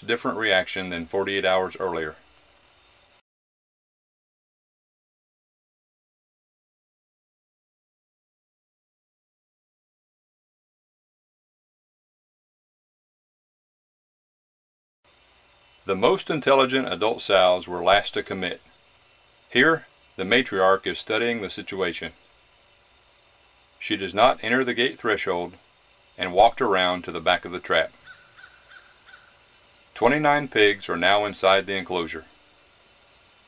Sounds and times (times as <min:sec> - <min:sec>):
Speech: 0:00.0 - 0:02.2, 0:15.9 - 0:18.7, 0:19.5 - 0:22.2, 0:23.8 - 0:25.6, 0:26.2 - 0:28.0, 0:30.0 - 0:32.3.